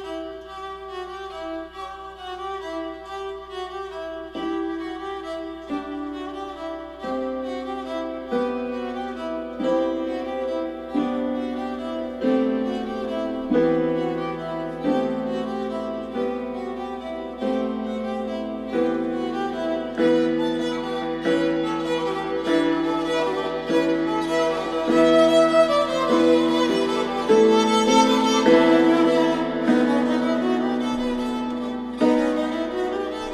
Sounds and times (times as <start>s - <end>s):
Violin, fiddle: 0.0s - 33.3s.